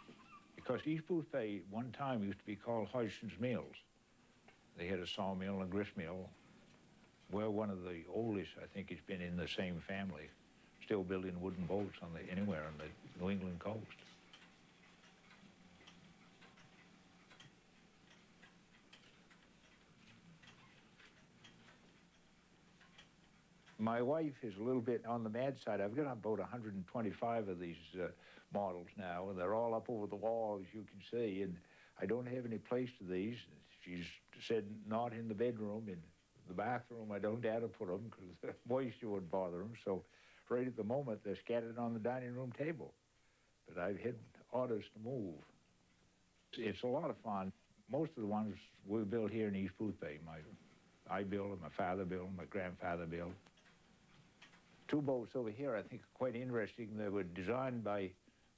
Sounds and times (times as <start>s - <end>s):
Speech: 0.6s - 3.9s, 4.8s - 6.4s, 7.3s - 14.1s, 23.8s - 43.0s, 43.6s - 45.6s, 46.5s - 53.5s, 54.9s - 58.2s.